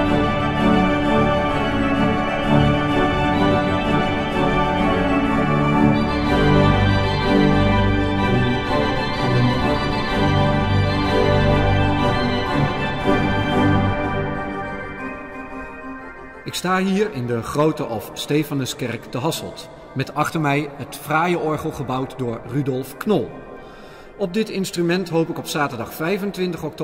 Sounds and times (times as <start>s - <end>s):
Piano: 0.0s - 18.8s
Speech: 16.5s - 23.4s, 24.2s - 26.8s.